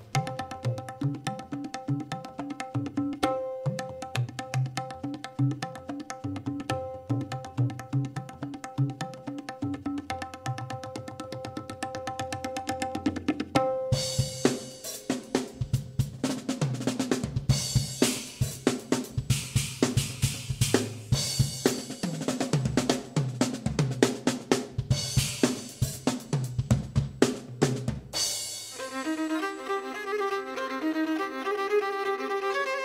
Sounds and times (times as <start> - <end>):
Tabla: 0.0 - 32.8
Hi-hat: 17.6 - 22.0.